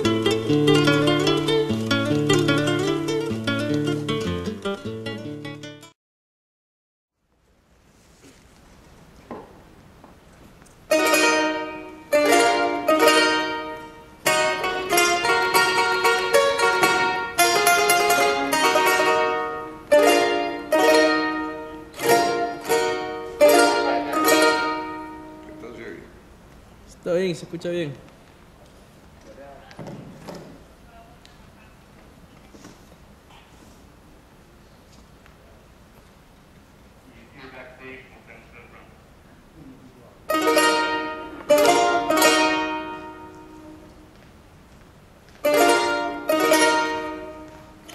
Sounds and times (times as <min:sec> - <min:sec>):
Speech: 0:26.9 - 0:28.0, 0:29.2 - 0:29.9, 0:37.1 - 0:39.0.